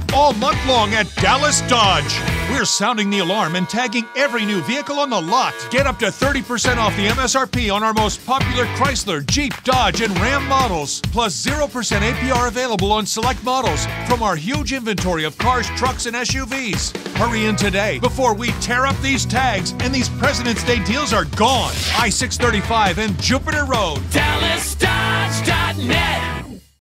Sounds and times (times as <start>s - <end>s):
Speech: 0.0s - 26.6s
Music: 0.0s - 26.8s.